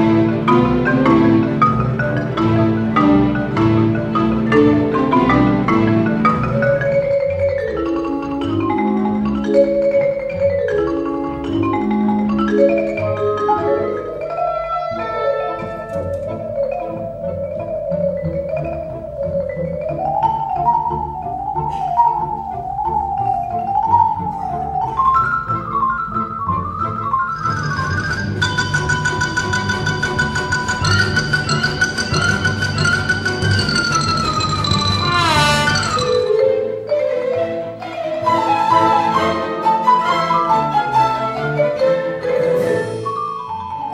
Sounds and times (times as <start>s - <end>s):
Vibraphone: 0.0s - 43.9s.